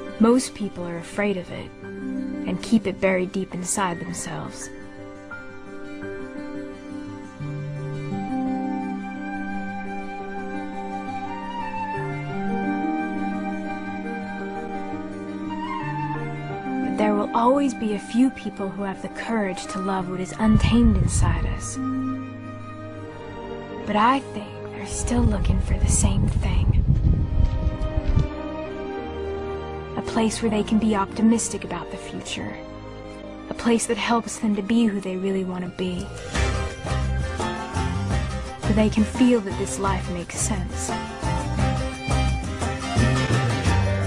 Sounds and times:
Music: 0.0s - 44.0s
Speech: 0.2s - 1.7s, 2.5s - 4.7s, 17.0s - 21.8s, 23.9s - 26.8s, 30.0s - 32.6s, 33.5s - 36.2s, 38.6s - 41.1s.

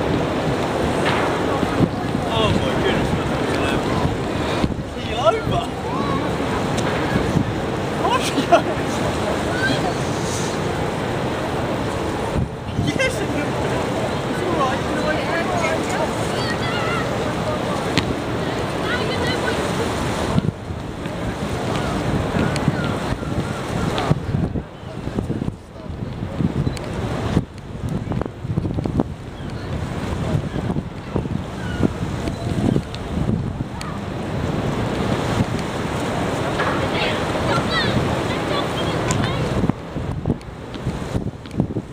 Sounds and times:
Ship: 0.0s - 41.9s.

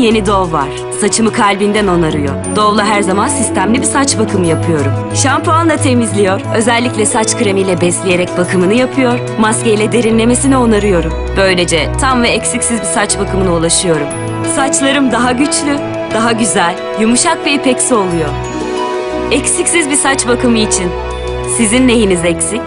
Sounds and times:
Speech: 0.0s - 18.4s, 19.3s - 22.6s
Music: 0.0s - 22.6s.

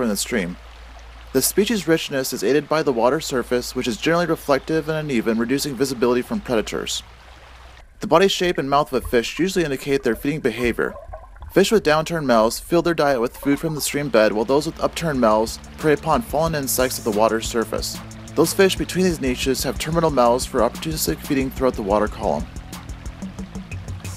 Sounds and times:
Speech: 0.0s - 0.6s, 1.4s - 7.0s, 8.0s - 11.0s, 11.6s - 22.5s
Stream: 0.0s - 24.1s.

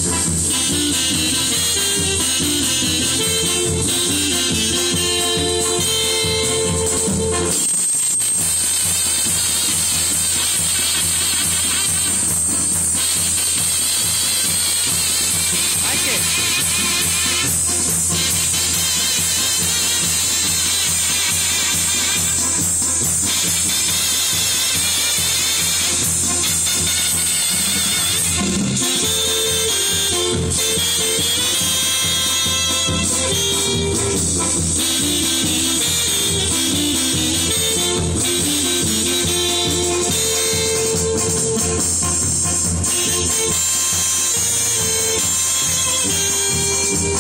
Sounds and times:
Music: 0.0s - 47.2s.

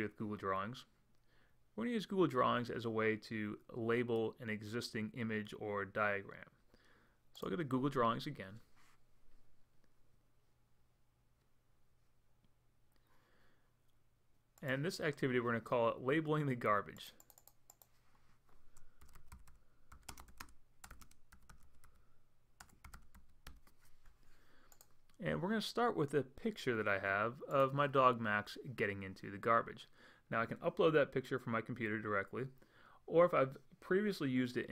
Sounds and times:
Speech: 0.0s - 0.9s, 1.8s - 6.6s, 7.4s - 8.7s, 14.6s - 17.2s, 25.2s - 34.7s.

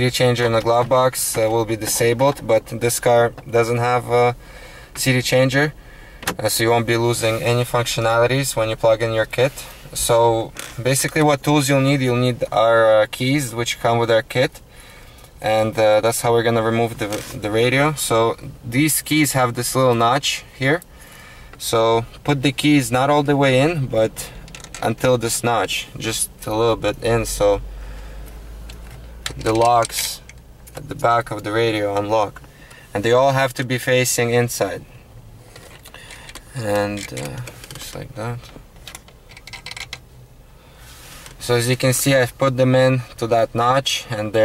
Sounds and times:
Speech: 0.0s - 4.4s, 5.0s - 5.8s, 6.4s - 14.6s, 15.4s - 20.8s, 21.6s - 27.6s, 29.4s - 30.2s, 30.8s - 34.9s, 36.5s - 38.5s, 41.4s - 44.4s.

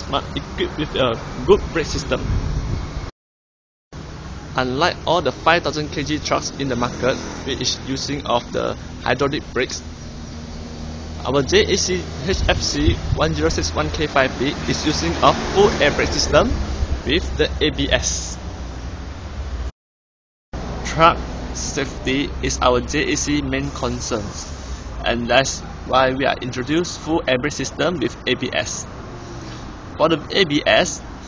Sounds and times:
Speech: 0.0s - 2.2s, 4.6s - 9.8s, 11.2s - 18.4s, 20.9s - 28.9s, 30.0s - 31.0s
Vehicle: 0.0s - 3.1s, 4.0s - 19.8s, 20.6s - 31.2s.

